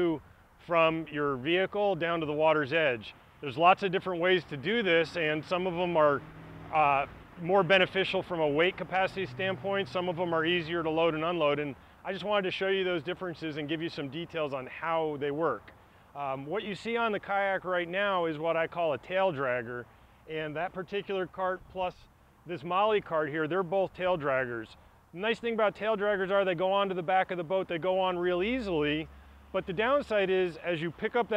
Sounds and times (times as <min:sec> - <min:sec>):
Speech: 0:00.0 - 0:31.3.